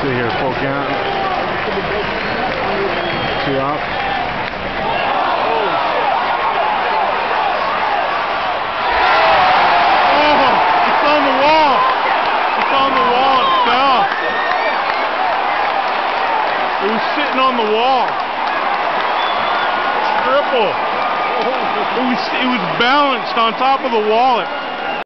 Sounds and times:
Speech: 0:00.0 - 0:01.0, 0:10.1 - 0:11.9, 0:12.6 - 0:14.1, 0:16.8 - 0:18.1, 0:21.4 - 0:24.5.

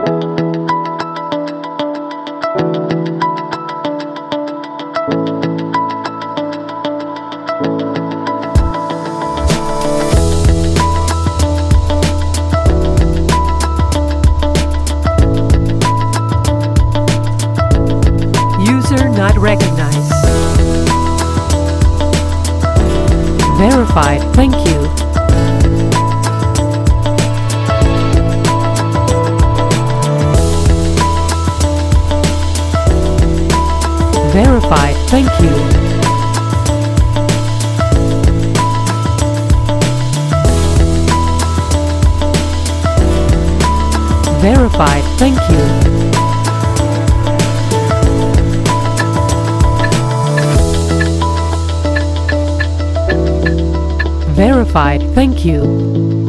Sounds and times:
Music: 0:00.0 - 0:56.2
Speech: 0:18.6 - 0:20.2, 0:23.5 - 0:25.0, 0:34.2 - 0:35.8, 0:44.3 - 0:45.9, 0:54.3 - 0:55.7.

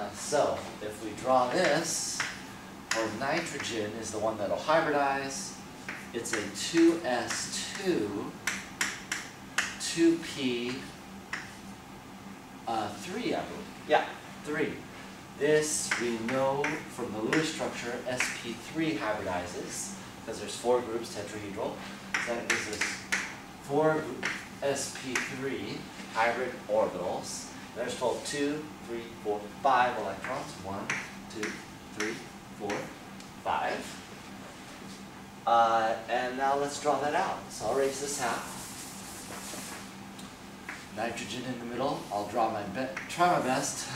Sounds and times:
Speech: 0:00.0 - 0:08.4, 0:09.8 - 0:11.0, 0:12.7 - 0:23.1, 0:23.7 - 0:34.1, 0:35.5 - 0:38.6, 0:40.9 - 0:43.9.

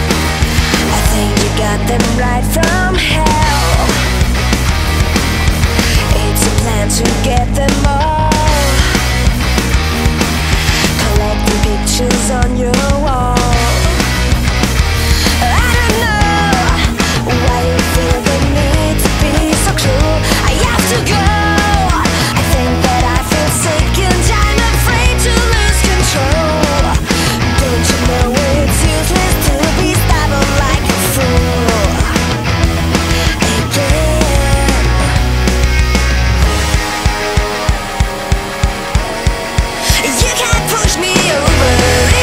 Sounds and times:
Music: 0:00.0 - 0:42.2.

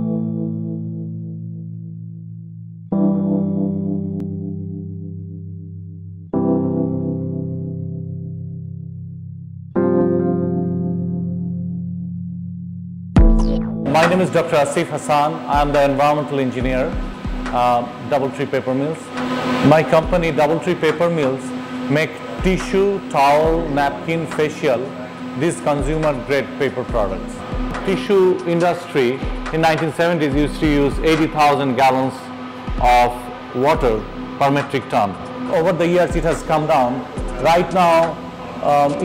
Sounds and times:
Music: 0:00.0 - 0:39.0
Speech: 0:13.9 - 0:17.0, 0:17.6 - 0:39.0.

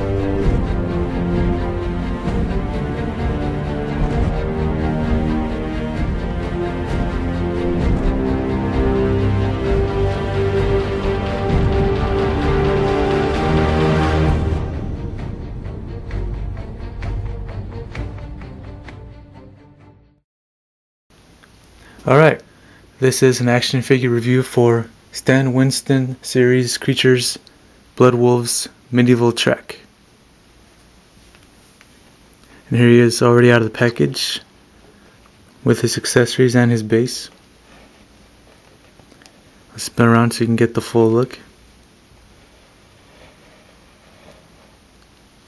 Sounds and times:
Speech: 0:22.0 - 0:22.4, 0:23.0 - 0:29.9, 0:32.7 - 0:34.5, 0:35.6 - 0:37.4, 0:39.7 - 0:41.5.

